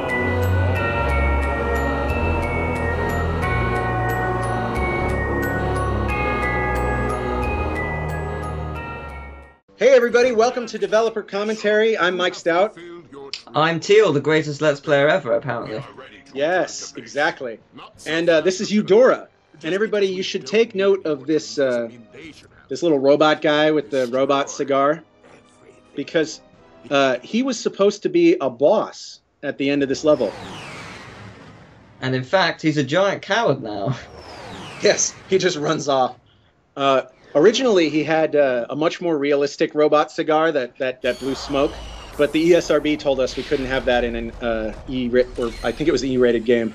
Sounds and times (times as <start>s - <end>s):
Speech: 9.8s - 30.3s, 32.0s - 34.1s, 34.8s - 36.2s, 36.8s - 46.7s.